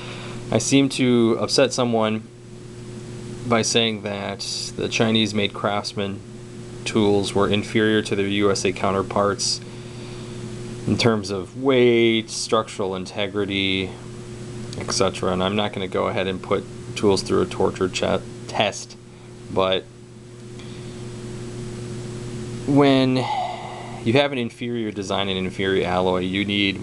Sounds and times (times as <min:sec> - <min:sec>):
Speech: 0:00.5 - 0:02.3, 0:03.4 - 0:06.2, 0:06.8 - 0:09.6, 0:10.9 - 0:14.0, 0:14.8 - 0:19.9, 0:22.7 - 0:23.3, 0:24.0 - 0:26.8.